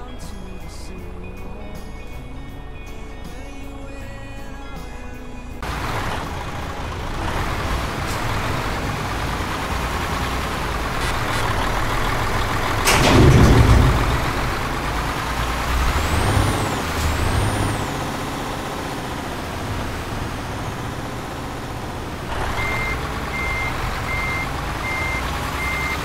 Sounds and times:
Truck: 0.0s - 26.0s.

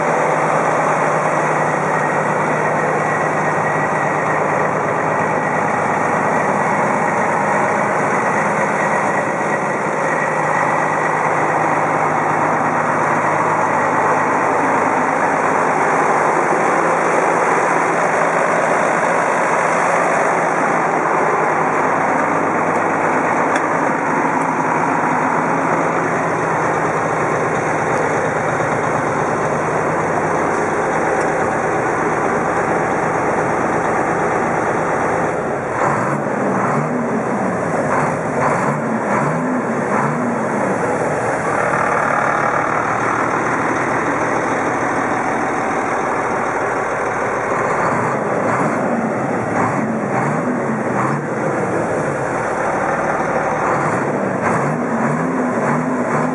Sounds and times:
Truck: 0.0s - 56.3s.

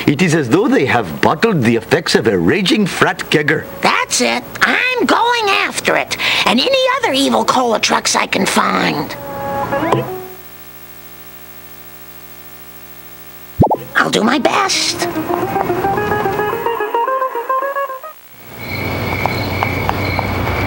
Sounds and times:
Speech: 0.1s - 9.2s, 13.9s - 15.2s.

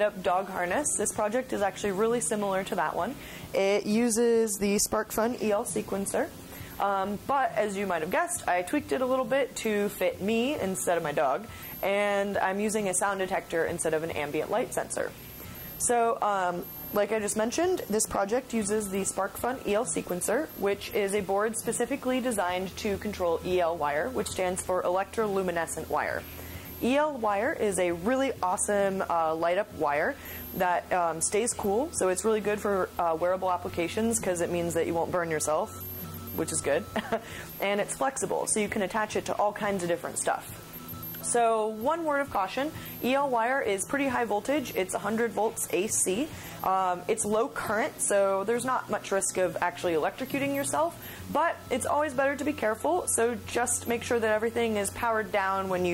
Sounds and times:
Speech: 0.0s - 15.1s, 15.8s - 26.2s, 26.8s - 35.7s, 37.6s - 40.5s, 41.3s - 55.9s.

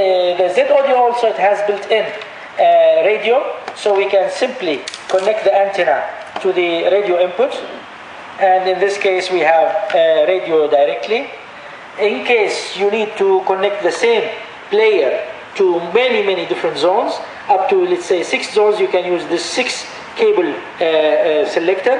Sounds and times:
Speech: 0.0s - 11.4s, 12.0s - 21.9s.

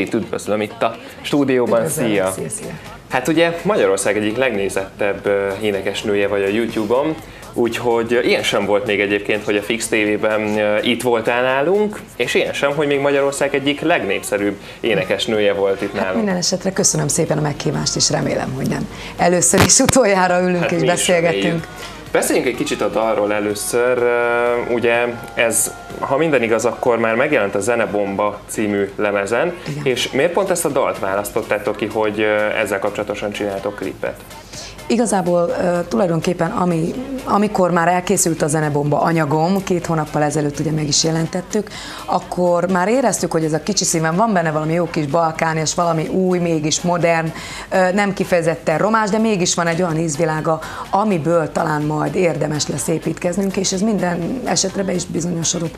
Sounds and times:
Speech: 0.0s - 34.2s
Music: 0.0s - 55.7s.

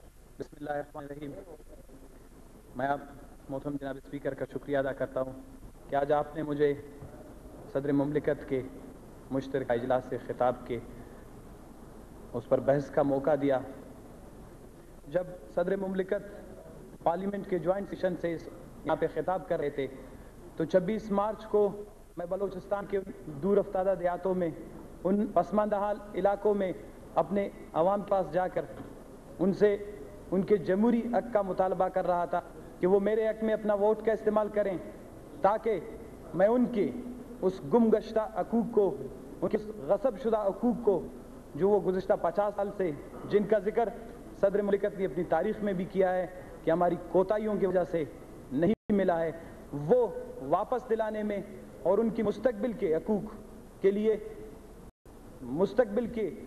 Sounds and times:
Narration, monologue: 0.0s - 56.4s
Male speech, man speaking: 0.4s - 2.0s, 2.8s - 6.9s, 7.7s - 10.9s, 12.3s - 13.8s, 15.1s - 20.0s, 20.6s - 28.8s, 29.4s - 54.3s, 55.4s - 56.4s.

